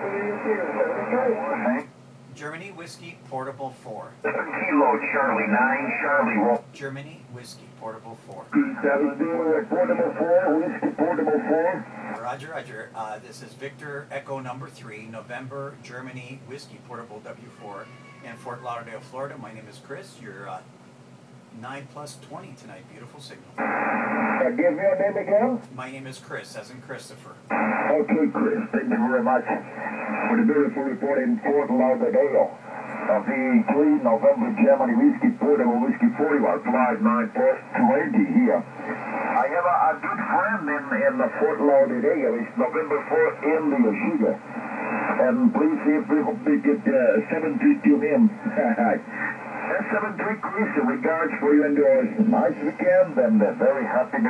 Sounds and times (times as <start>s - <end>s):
Radio: 0.0s - 1.9s, 4.2s - 6.7s, 8.3s - 13.0s, 21.6s - 26.1s, 26.7s - 54.3s
Speech: 0.0s - 20.7s, 21.5s - 23.5s, 24.4s - 38.7s, 39.3s - 44.4s, 45.1s - 49.1s, 49.7s - 54.3s.